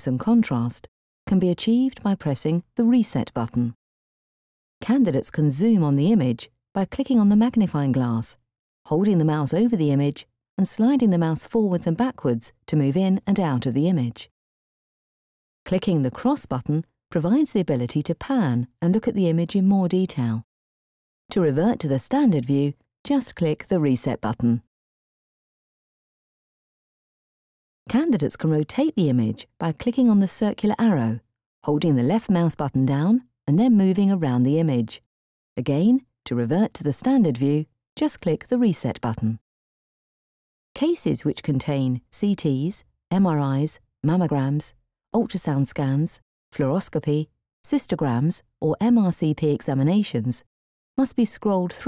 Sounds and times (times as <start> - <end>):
Speech: 0.0 - 3.8, 4.8 - 14.3, 15.7 - 20.5, 21.3 - 24.7, 27.9 - 35.0, 35.6 - 39.4, 40.8 - 51.8.